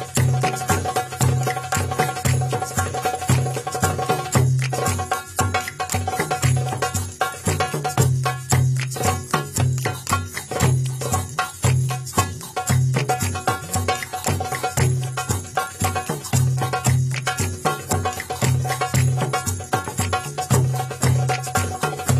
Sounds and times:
Traditional music: 0.0 - 22.2.

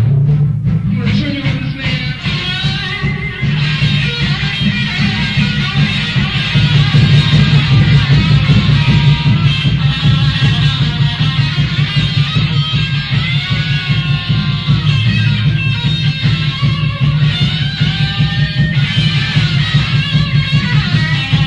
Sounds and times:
Music: 0.0 - 21.4.

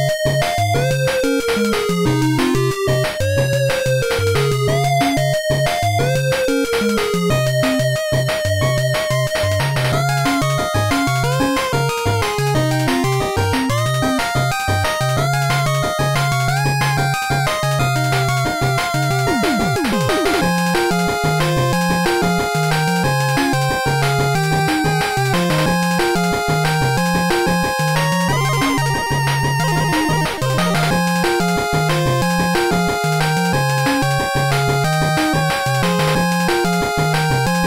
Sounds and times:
Background music: 0.0 - 37.6
Video game music: 0.0 - 37.6.

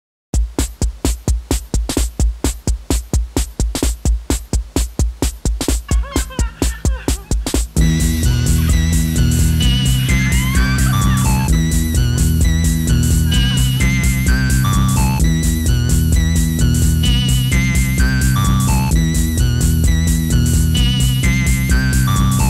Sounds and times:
Music: 0.4 - 22.4.

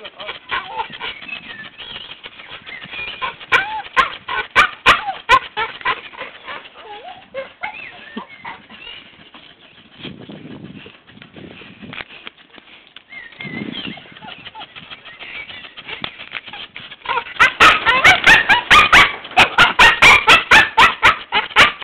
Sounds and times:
Bow-wow: 17.1 - 21.8
Yip: 17.1 - 21.8.

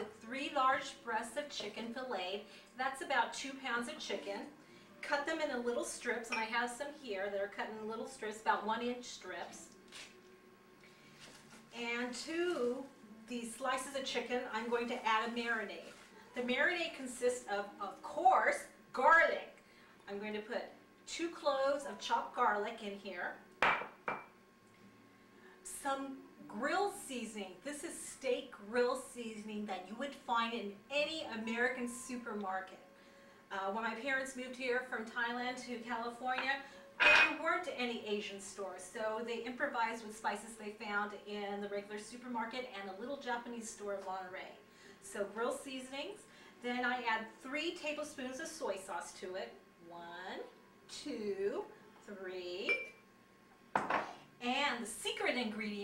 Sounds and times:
Speech: 0.0 - 9.7, 11.8 - 23.4, 25.7 - 32.8, 33.5 - 36.6, 37.2 - 52.9, 54.4 - 55.8.

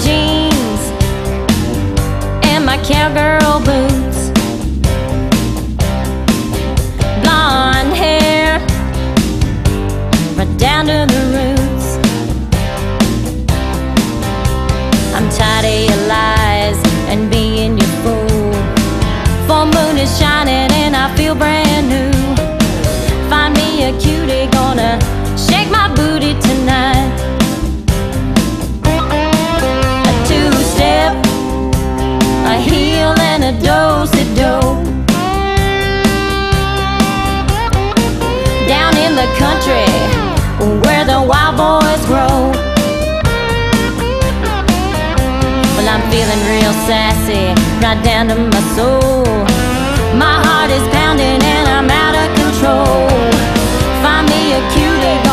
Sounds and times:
Music: 0.0 - 55.3.

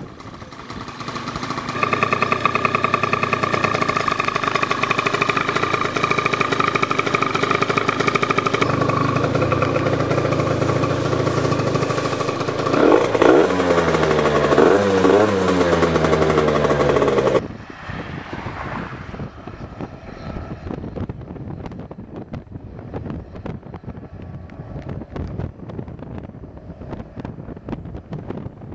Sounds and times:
Motorcycle: 0.0 - 28.7
Outside, urban or manmade: 0.0 - 28.7.

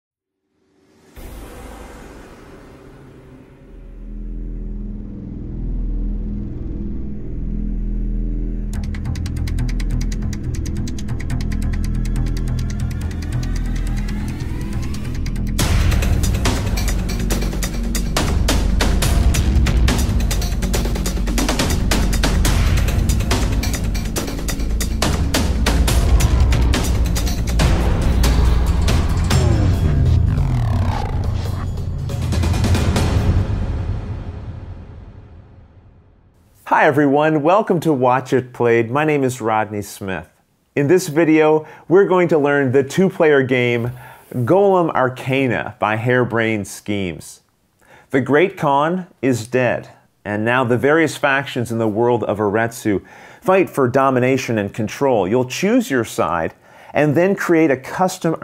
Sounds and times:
Music: 0.4 - 36.3.

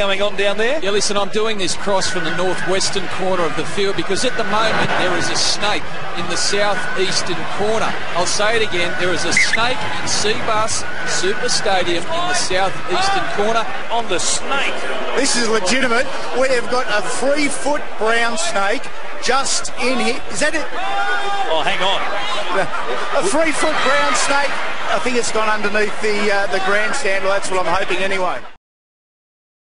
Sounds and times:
Speech: 0.0 - 28.6.

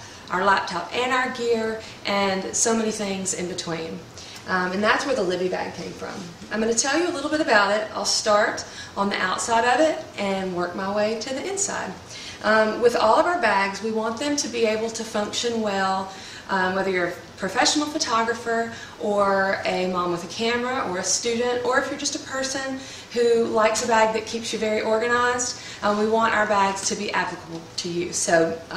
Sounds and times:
Speech: 0.3 - 28.7.

